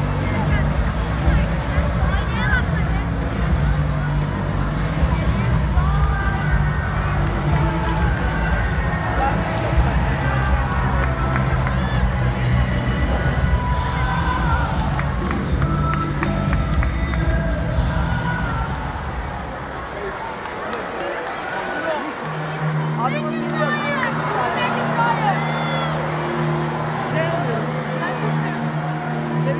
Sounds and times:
Speech: 0.0 - 11.5
Music: 0.0 - 29.5.

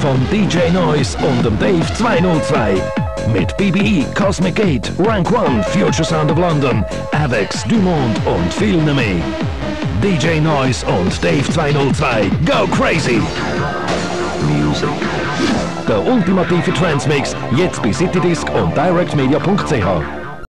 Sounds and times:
Speech: 0.0 - 9.3, 10.0 - 13.3, 14.4 - 15.0, 15.9 - 20.1
Music: 0.0 - 20.5.

